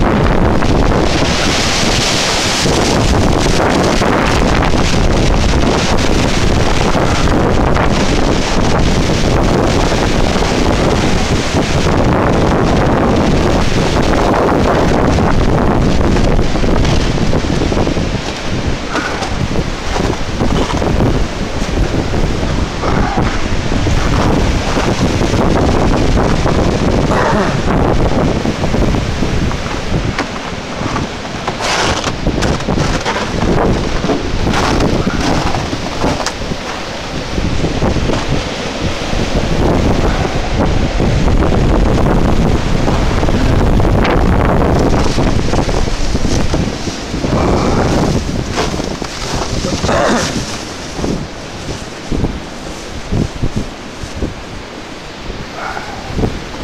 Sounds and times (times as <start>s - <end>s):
Wind noise (microphone): 0.0s - 56.6s.